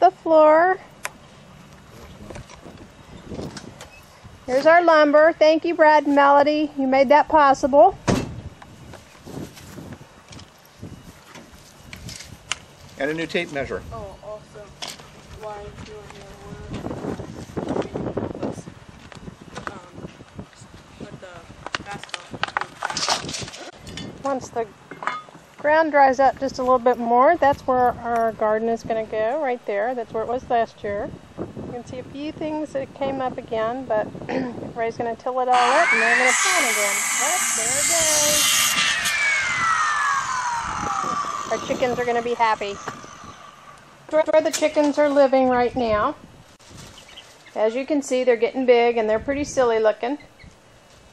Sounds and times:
Speech: 4.5s - 8.0s, 15.4s - 16.8s, 21.0s - 22.8s, 41.6s - 42.8s, 47.6s - 50.2s.

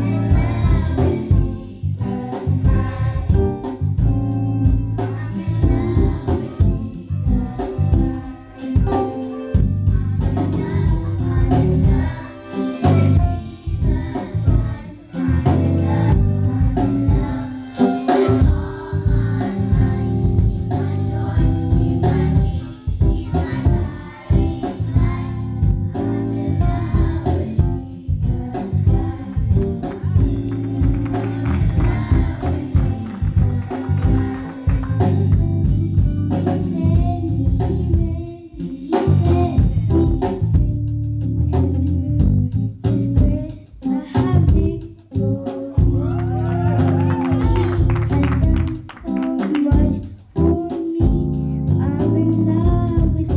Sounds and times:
Choir: 0.0s - 3.8s, 5.0s - 9.2s, 9.9s - 35.7s, 45.9s - 50.0s.

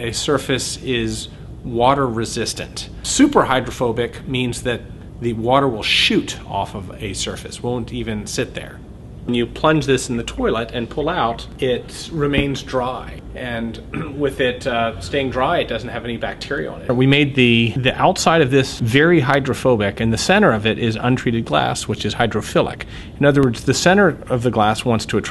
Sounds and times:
Speech: 0.0s - 25.3s.

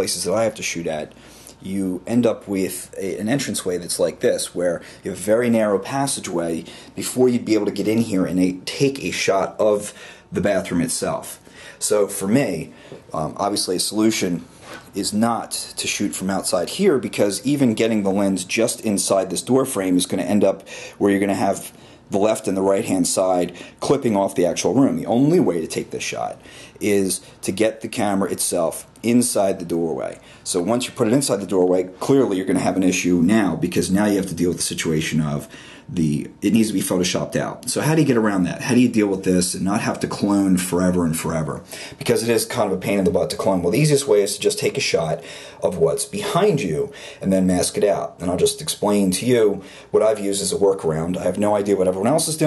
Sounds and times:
Speech: 0.0s - 52.4s.

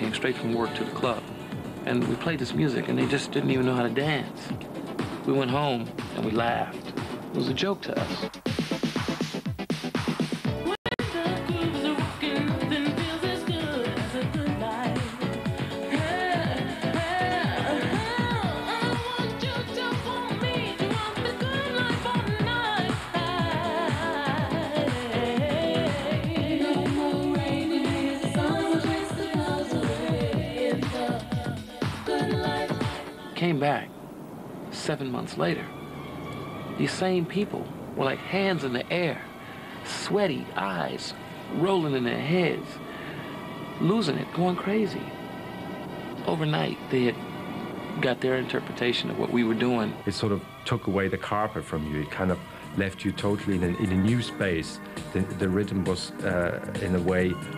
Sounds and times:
Techno: 0.0s - 33.6s.

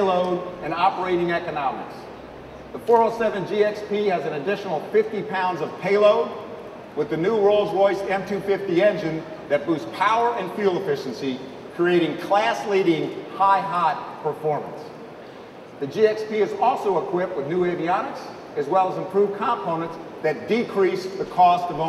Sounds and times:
Speech: 0.0s - 2.1s, 2.8s - 6.4s, 7.0s - 15.0s, 15.8s - 21.8s.

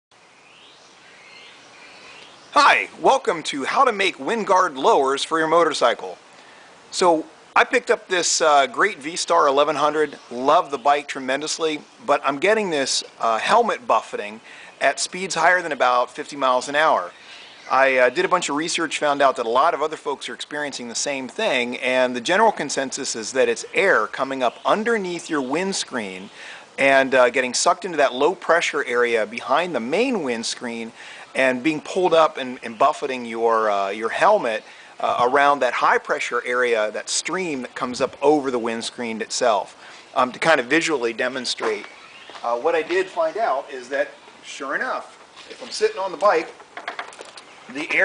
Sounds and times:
Speech: 2.6s - 6.2s, 6.9s - 46.6s, 47.7s - 48.0s.

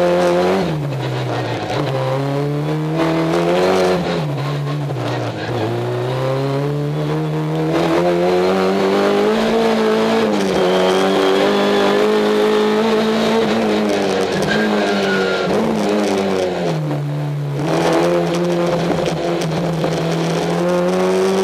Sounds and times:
Car: 0.0s - 21.4s.

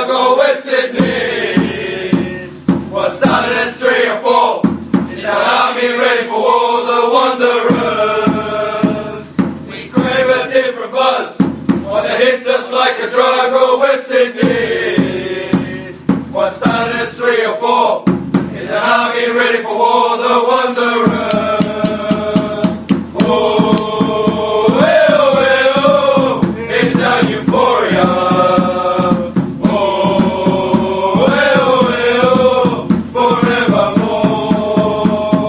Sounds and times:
Mantra: 0.0s - 35.4s.

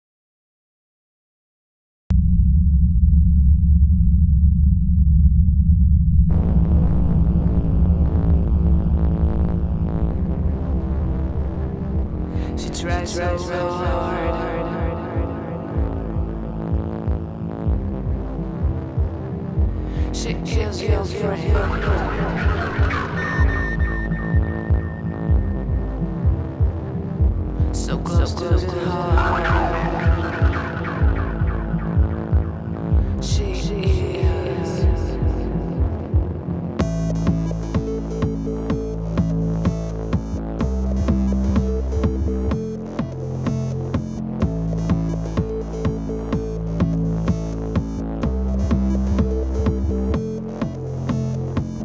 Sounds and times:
Silence: 2.1s - 12.4s
Music: 6.3s - 51.8s.

